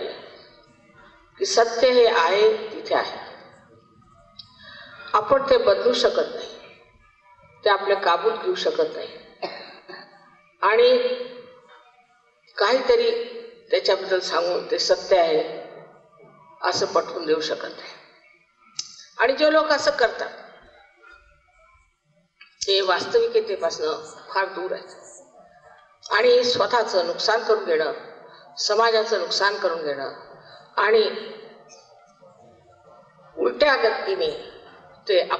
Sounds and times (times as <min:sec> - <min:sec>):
Female speech, woman speaking: 0:00.0 - 0:00.5, 0:01.1 - 0:03.6, 0:04.4 - 0:06.8, 0:07.6 - 0:11.4, 0:12.6 - 0:15.8, 0:16.4 - 0:18.0, 0:18.8 - 0:20.8, 0:22.6 - 0:31.9, 0:32.5 - 0:35.3
Narration, monologue: 0:18.8 - 0:35.3.